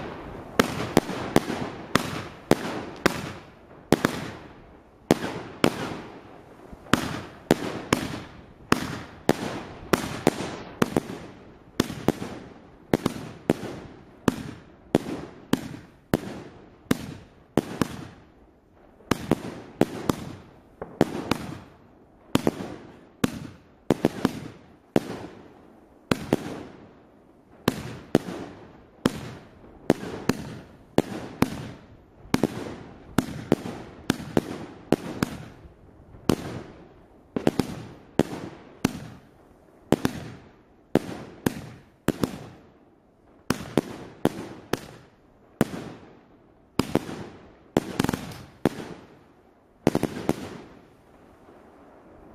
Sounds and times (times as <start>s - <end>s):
Fireworks: 0.0s - 52.3s.